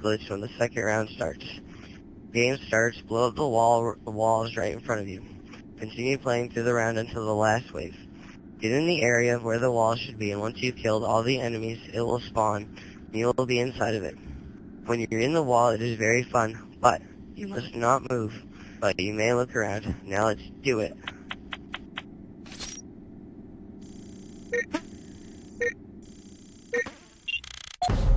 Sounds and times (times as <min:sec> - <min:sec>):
Speech: 0:00.0 - 0:01.6, 0:02.4 - 0:08.0, 0:08.6 - 0:14.3, 0:14.9 - 0:21.1.